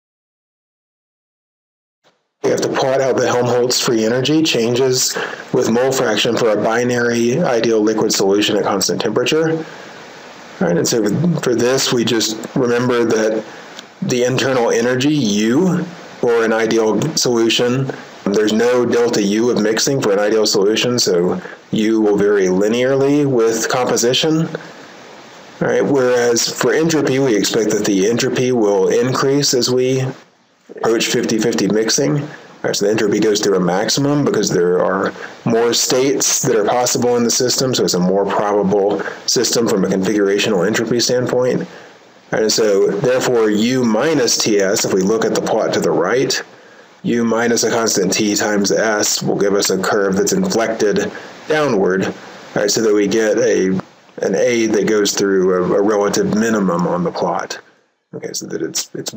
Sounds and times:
Speech: 2.4 - 9.8, 10.6 - 24.7, 25.6 - 59.1.

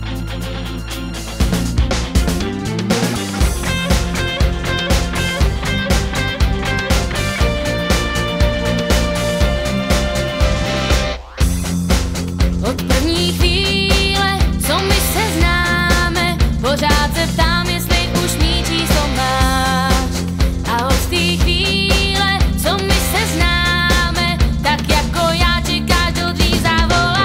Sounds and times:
Music: 0.0 - 27.2.

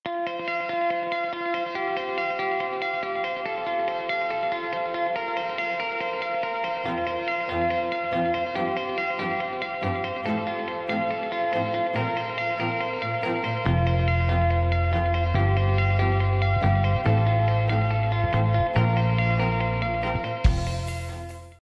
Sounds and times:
Music: 0.1 - 21.6.

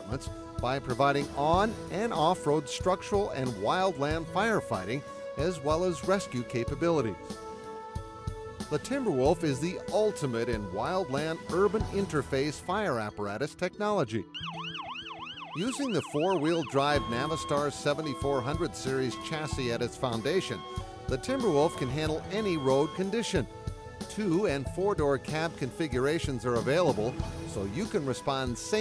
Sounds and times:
Speech: 0.0 - 7.2, 8.8 - 14.3, 15.6 - 20.6, 21.2 - 23.4, 24.1 - 28.8
Music: 0.0 - 28.8
Fire engine, fire truck (siren): 14.4 - 20.8.

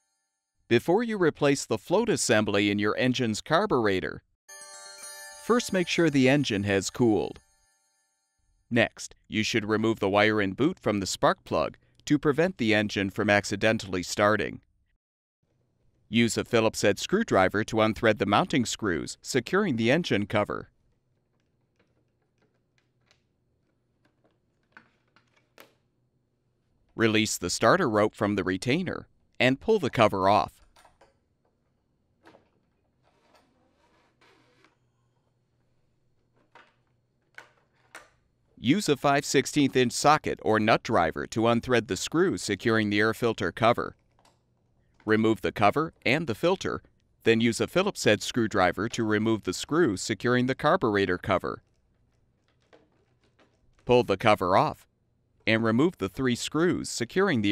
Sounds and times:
Speech: 0.7 - 4.2, 5.5 - 7.4, 8.7 - 14.6, 16.1 - 20.7, 27.0 - 30.6, 38.6 - 44.0, 45.1 - 51.6, 53.9 - 54.9, 55.5 - 57.5.

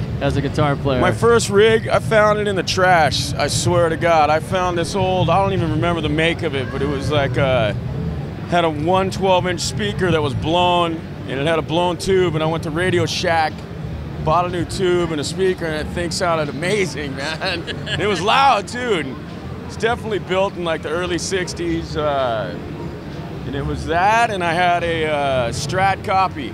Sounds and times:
Speech: 0.2 - 7.8, 23.5 - 26.5.

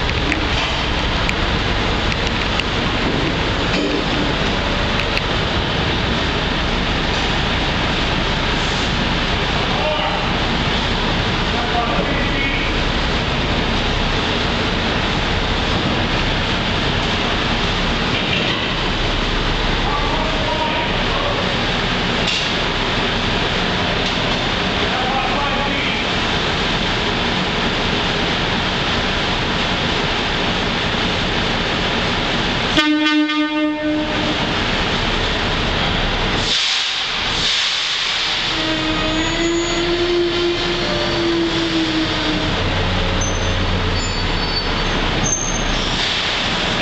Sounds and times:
Steam whistle: 32.8 - 34.4, 38.4 - 42.5
Hiss: 36.4 - 42.5, 45.6 - 46.8.

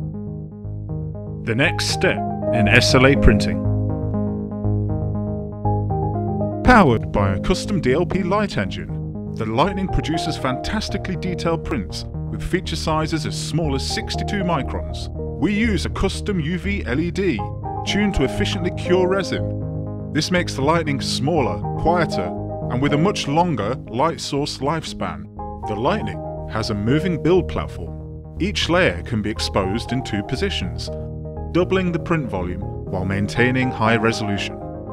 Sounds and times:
Music: 0.0 - 34.9
Speech: 1.5 - 3.6, 6.7 - 19.5, 20.2 - 31.0, 31.6 - 34.6.

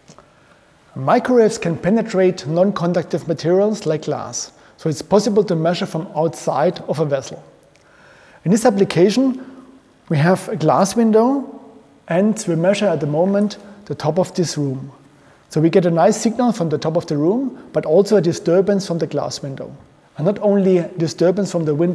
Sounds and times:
Speech: 0.9 - 7.6, 8.4 - 9.4, 10.1 - 21.9.

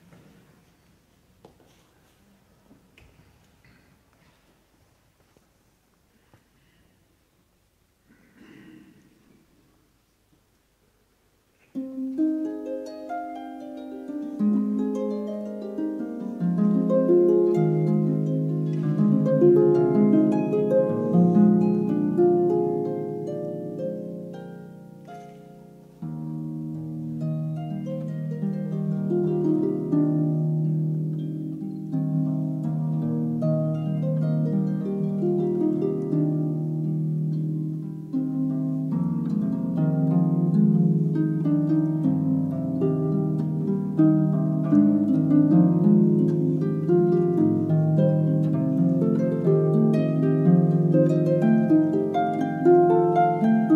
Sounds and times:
Music: 11.6 - 53.7.

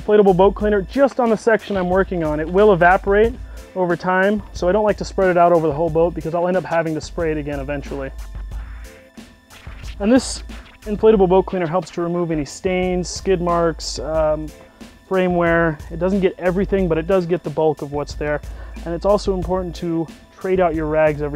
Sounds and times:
Speech: 0.0 - 8.1, 10.0 - 14.5, 15.1 - 21.3
Music: 0.0 - 21.3.

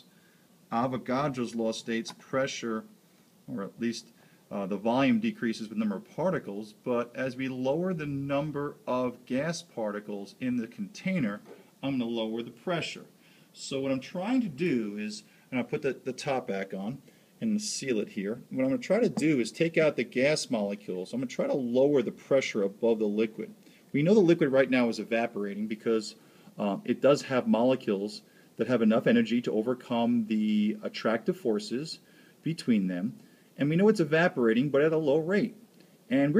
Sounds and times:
Speech: 0.7 - 2.9, 3.5 - 36.3.

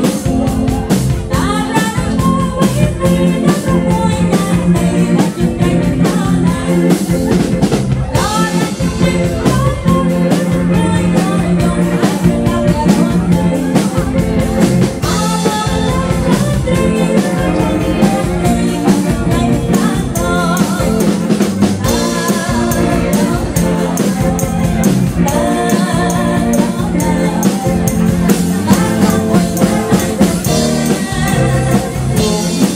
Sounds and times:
Music: 0.0 - 32.7
Female singing: 1.3 - 7.5, 8.1 - 32.7.

